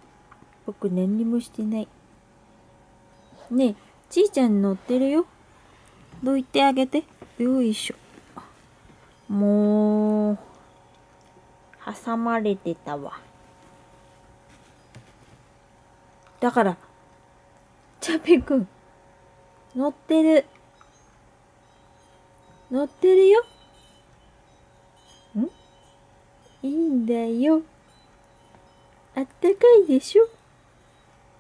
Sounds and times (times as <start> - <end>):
Speech: 0.7 - 1.9, 3.5 - 5.3, 6.2 - 8.0, 11.8 - 13.2, 16.4 - 16.8, 18.0 - 18.7, 22.7 - 23.5, 26.6 - 27.7, 29.2 - 30.4.